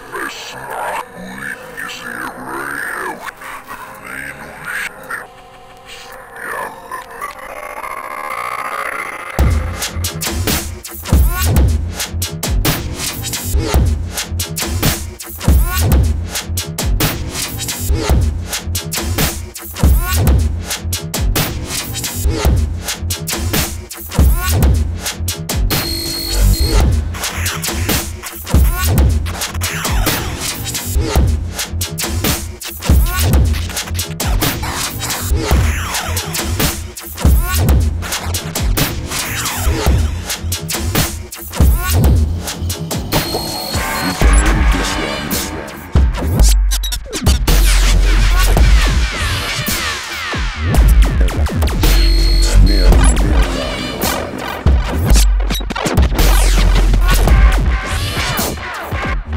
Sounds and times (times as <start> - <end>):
Speech: 0.0 - 7.6
Music: 0.0 - 59.3.